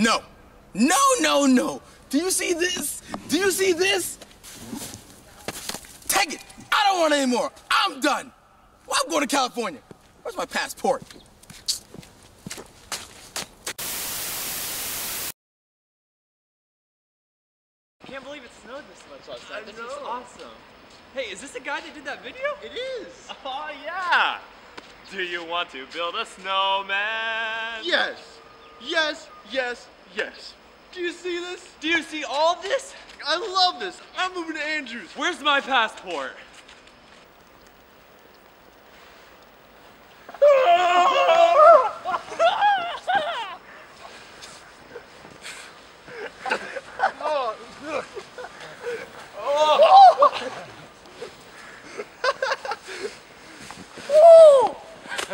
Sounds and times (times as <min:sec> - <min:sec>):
Giggle: 0:42.0 - 0:43.7, 0:46.1 - 0:49.3, 0:50.1 - 0:53.2.